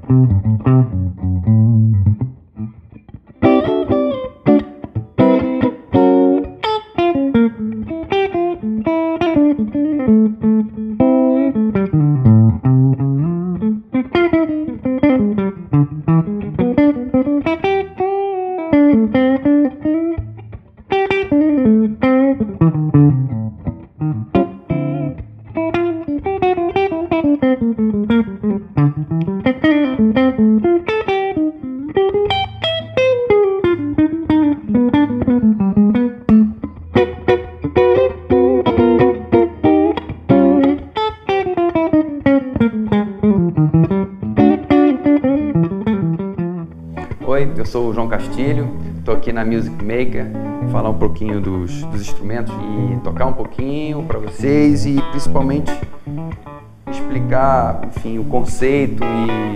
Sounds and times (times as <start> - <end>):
Music: 0.0 - 59.5.